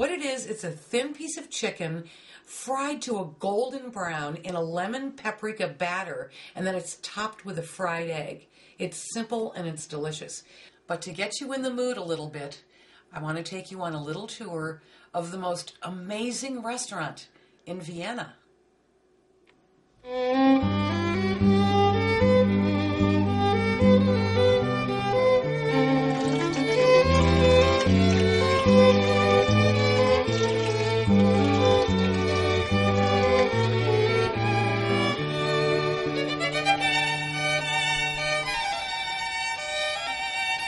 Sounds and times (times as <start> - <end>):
Speech: 0.0 - 18.4
Music: 20.0 - 40.6.